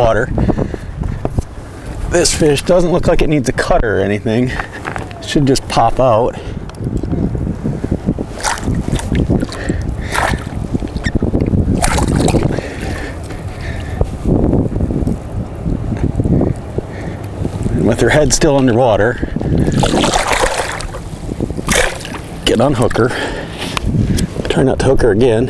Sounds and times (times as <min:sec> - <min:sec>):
Speech: 0:00.0 - 0:00.3, 0:02.1 - 0:04.6, 0:05.2 - 0:06.4, 0:17.8 - 0:19.2, 0:22.5 - 0:23.2, 0:24.4 - 0:25.5.